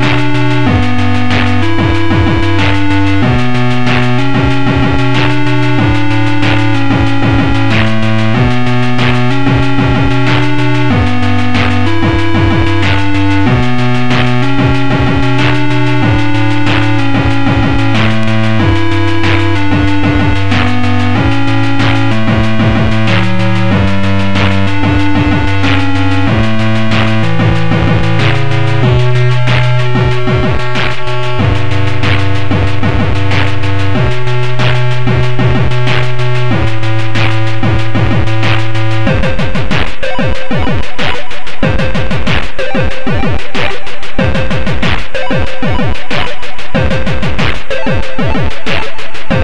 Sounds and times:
Video game music: 0.0s - 49.4s.

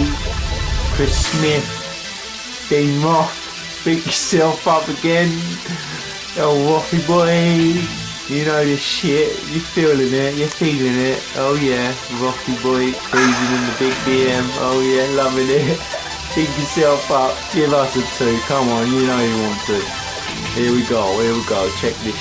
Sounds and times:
Music: 0.0s - 22.2s
Speech: 1.0s - 1.8s, 2.7s - 5.6s, 6.3s - 19.9s, 20.5s - 22.2s.

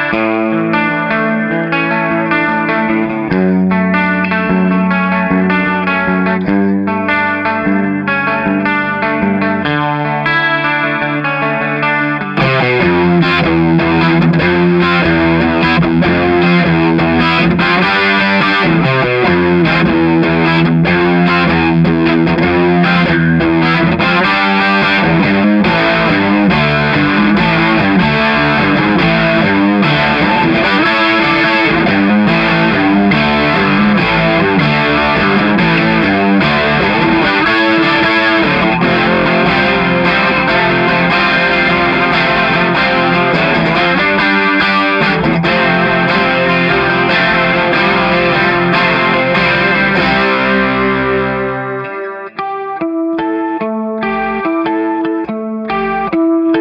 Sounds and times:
Distortion: 0.0s - 56.6s
Music: 0.0s - 56.6s.

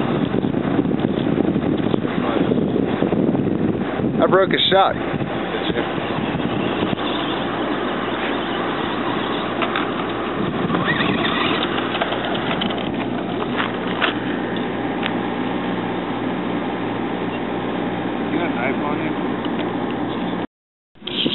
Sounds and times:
Speech: 4.2s - 5.9s, 18.3s - 19.2s.

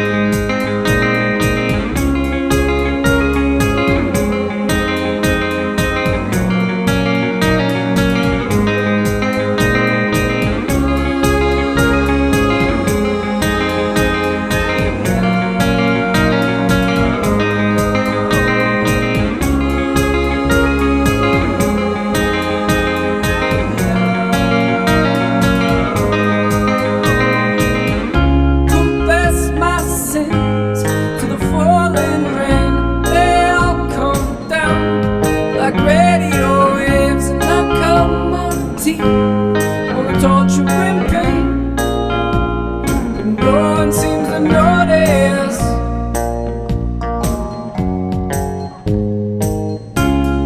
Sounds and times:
Electronic music: 0.0s - 36.6s.

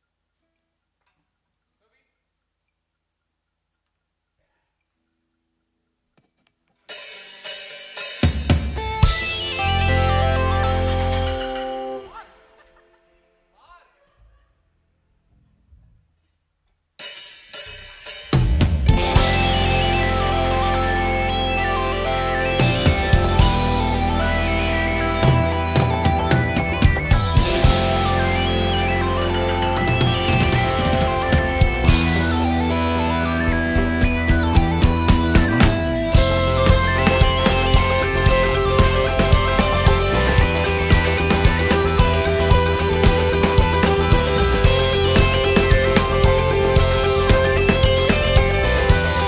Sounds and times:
Music: 6.2s - 14.0s, 17.0s - 49.2s.

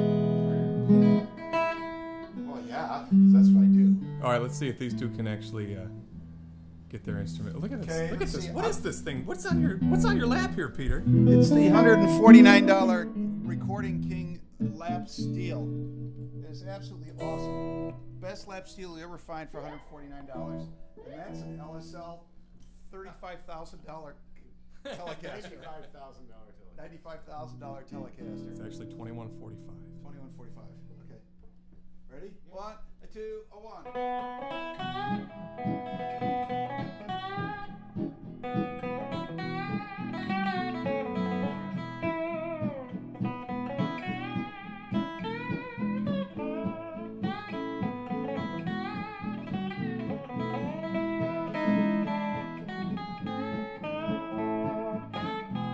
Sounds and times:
Electric guitar: 0.0s - 18.4s, 20.4s - 21.7s, 27.7s - 30.4s, 33.8s - 55.7s
Acoustic guitar: 0.0s - 18.5s, 34.0s - 55.7s
Strum: 0.0s - 22.0s, 34.0s - 55.7s
Speech: 2.5s - 6.0s, 6.9s - 15.7s, 16.4s - 22.3s, 22.9s - 31.3s, 32.1s - 33.9s.

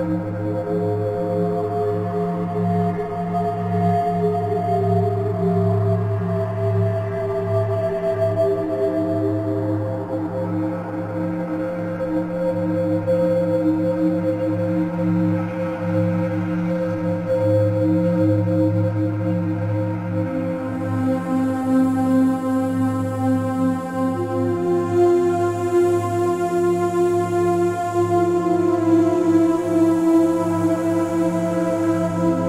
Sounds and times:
Music: 0.0s - 32.4s.

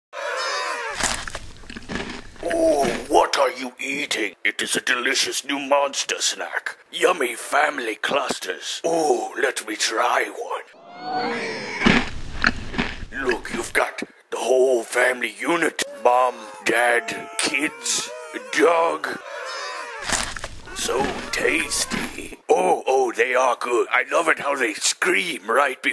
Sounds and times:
Speech: 2.4s - 10.7s, 13.2s - 19.2s, 20.7s - 25.9s.

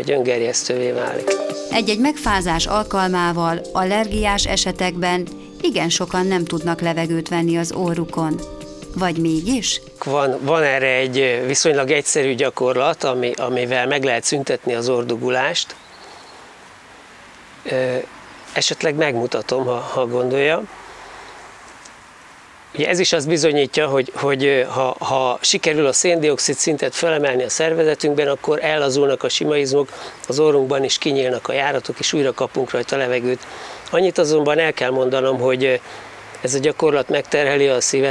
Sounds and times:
Male speech, man speaking: 0.0s - 1.4s, 9.6s - 15.8s, 17.7s - 20.7s, 22.8s - 35.8s, 36.4s - 38.1s
Rustling leaves: 2.2s - 38.1s.

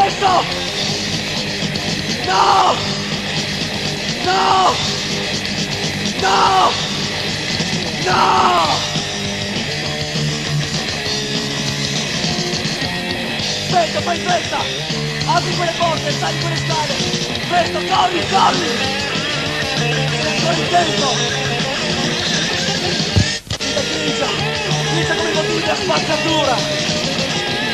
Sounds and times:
Music: 0.0s - 27.7s.

